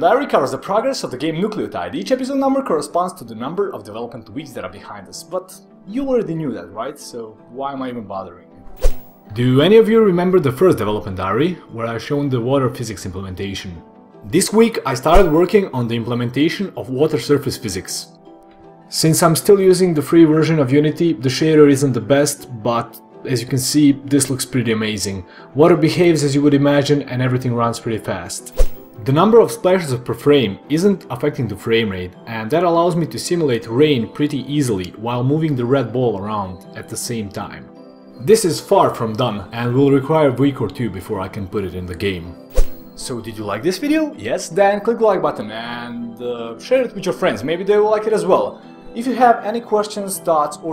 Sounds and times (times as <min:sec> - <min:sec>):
Speech: 0:00.0 - 0:08.5, 0:09.3 - 0:18.1, 0:18.9 - 0:42.4, 0:43.0 - 0:50.7
Music: 0:00.0 - 0:50.7.